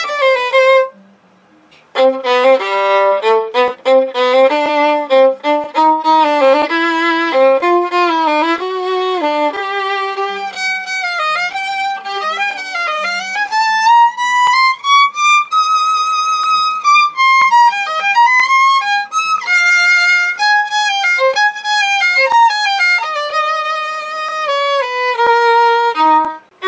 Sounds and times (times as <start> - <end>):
Violin, fiddle: 0.0 - 1.0, 1.9 - 26.6.